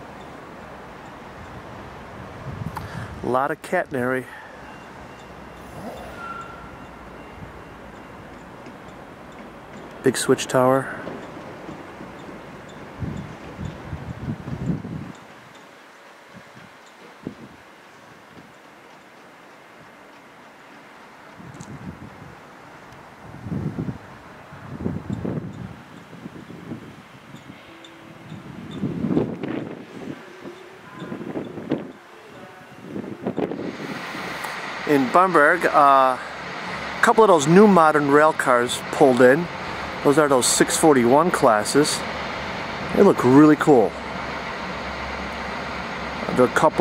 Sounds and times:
Railroad car, train wagon: 0.0 - 46.8
Train: 0.0 - 46.8
Wind: 0.0 - 46.8
Speech: 3.2 - 4.4, 10.0 - 11.0, 34.9 - 36.3, 37.0 - 42.0, 42.9 - 44.0, 46.3 - 46.8.

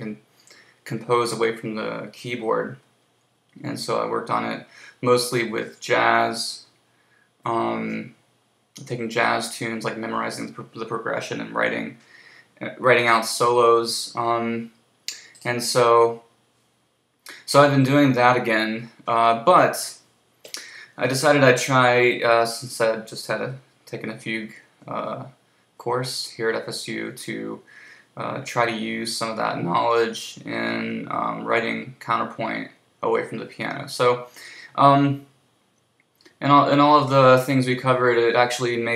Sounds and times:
Speech: 0.0 - 2.9, 3.6 - 6.7, 7.4 - 8.2, 8.8 - 16.3, 17.3 - 35.3, 36.3 - 38.9.

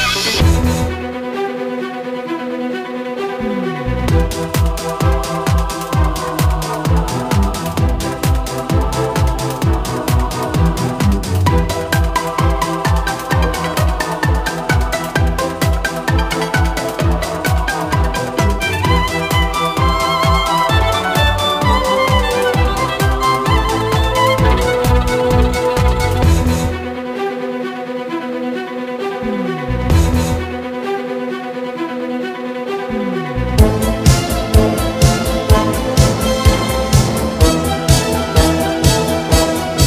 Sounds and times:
Soundtrack music: 0.0 - 39.8.

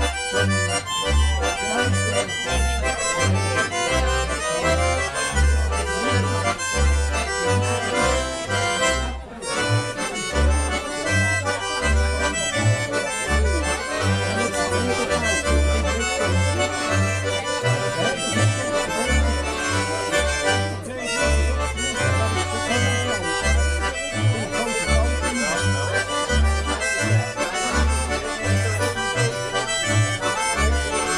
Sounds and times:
Music: 0.0 - 31.1
Speech: 0.0 - 31.1.

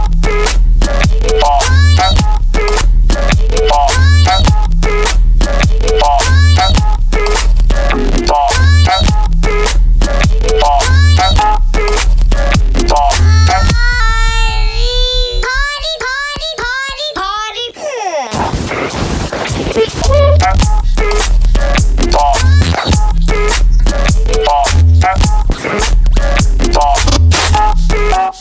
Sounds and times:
Music: 0.0 - 15.6, 18.6 - 28.4.

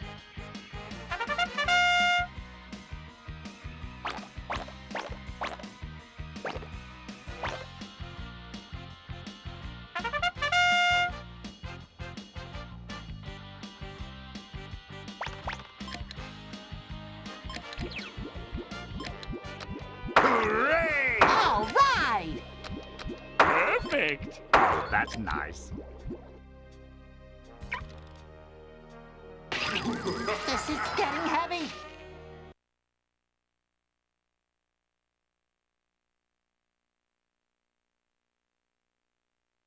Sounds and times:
Speech: 20.4 - 22.4, 23.6 - 24.3, 24.9 - 25.7, 29.6 - 31.8.

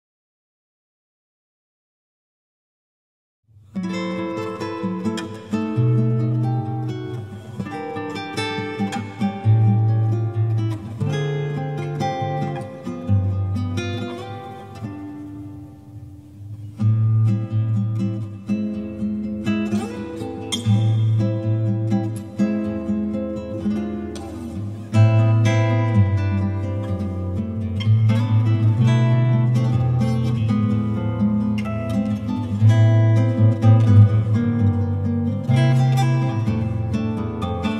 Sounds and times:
Music: 3.7 - 37.7.

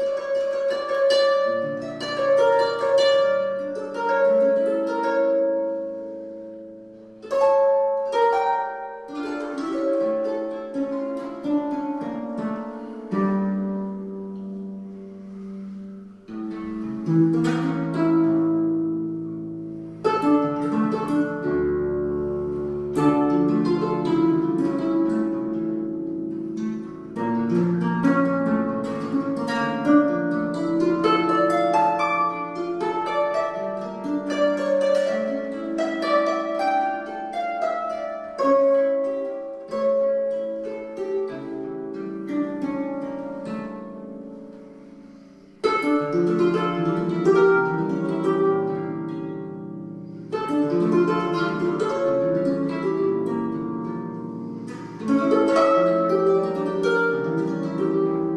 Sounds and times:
Harp: 0.0 - 58.3
Pizzicato: 0.0 - 58.3.

